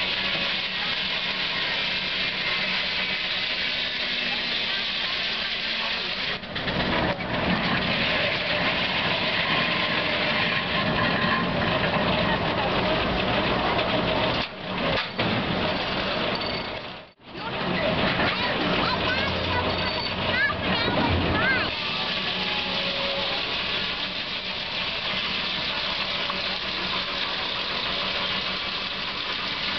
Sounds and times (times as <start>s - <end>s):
Engine: 0.0s - 29.7s
Speech: 10.8s - 14.0s, 17.3s - 23.5s.